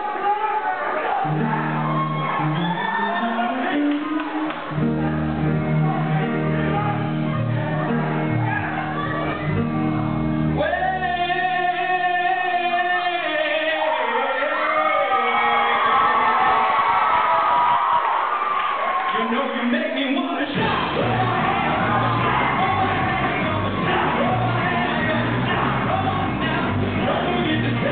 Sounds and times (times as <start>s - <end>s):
Music: 0.1s - 17.8s, 19.1s - 27.9s.